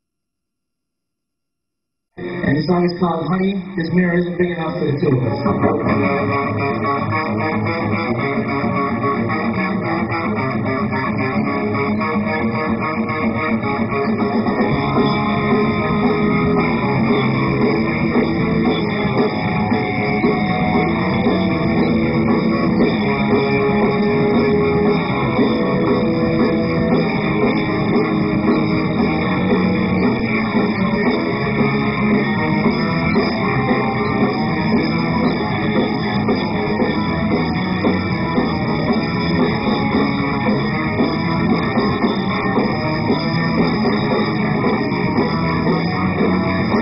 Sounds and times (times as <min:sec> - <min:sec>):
Electric guitar: 0:02.2 - 0:46.8.